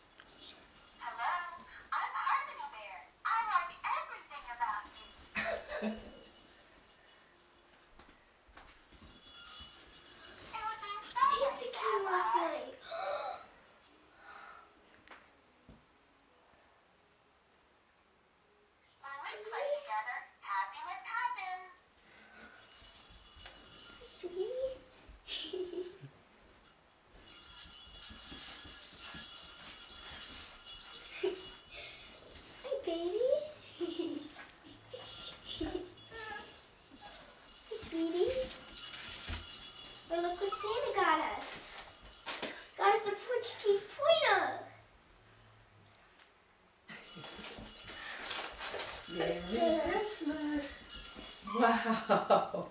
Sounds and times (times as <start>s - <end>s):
Jingle bell: 0.0s - 2.8s, 3.5s - 14.6s, 21.6s - 44.9s, 46.9s - 52.7s.